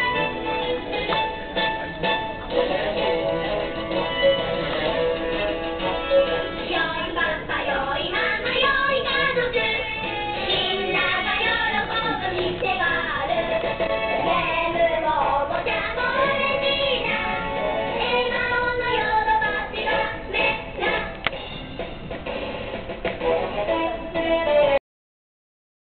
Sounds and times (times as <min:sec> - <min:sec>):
Music: 0:00.0 - 0:24.8.